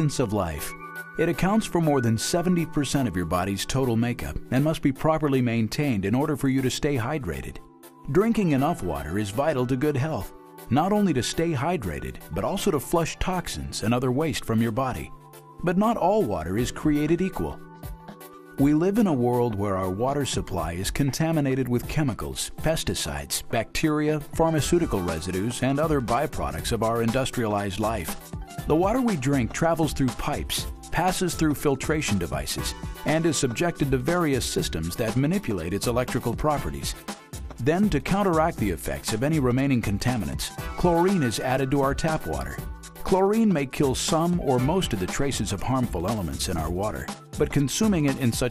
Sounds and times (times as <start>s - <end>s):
Speech: 0.0s - 17.6s, 18.6s - 37.0s, 37.6s - 48.5s
Music: 0.0s - 48.5s.